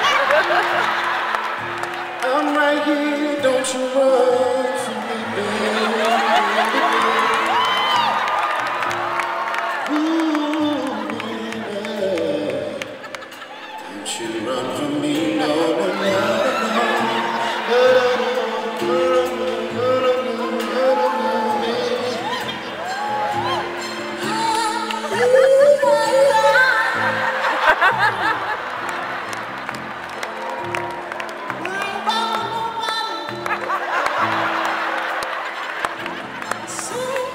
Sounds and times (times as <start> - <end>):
Music: 0.0 - 37.3.